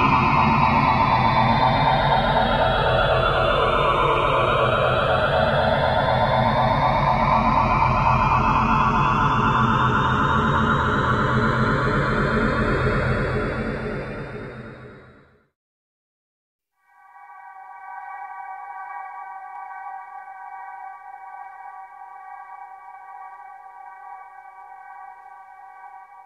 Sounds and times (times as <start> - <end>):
Music: 16.8 - 26.2
Sonar: 16.8 - 26.2.